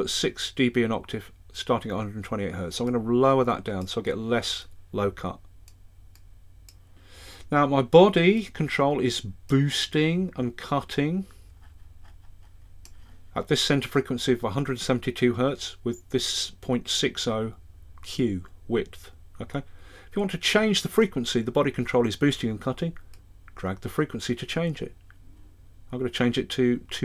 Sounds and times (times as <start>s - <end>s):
Speech: 0.0s - 5.5s, 7.5s - 11.3s, 13.4s - 23.0s, 23.6s - 25.0s, 25.9s - 27.0s.